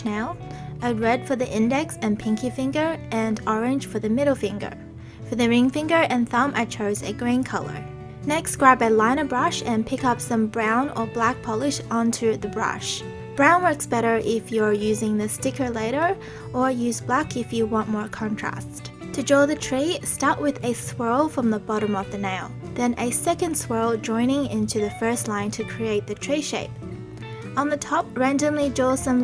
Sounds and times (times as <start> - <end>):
Speech: 0.0 - 26.7, 27.6 - 29.2
Music: 0.0 - 29.2.